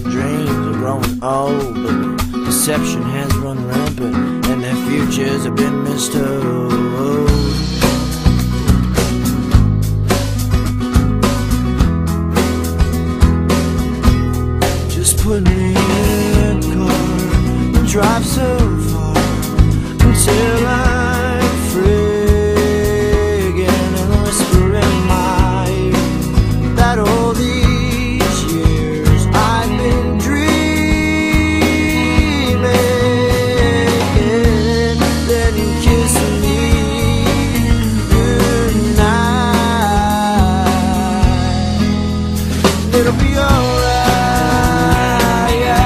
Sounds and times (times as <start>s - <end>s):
Music: 0.0s - 45.8s.